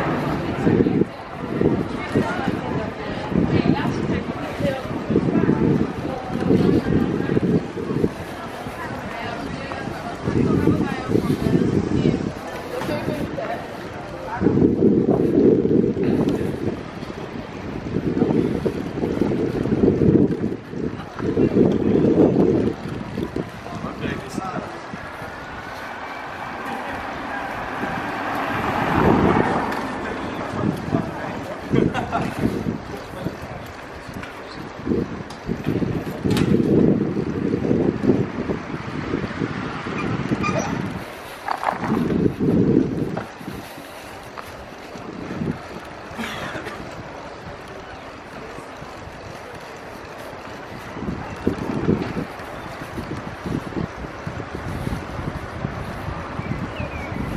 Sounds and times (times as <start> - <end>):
Bicycle: 0.0 - 57.3
Speech: 0.1 - 14.8, 23.4 - 25.0, 29.5 - 31.9.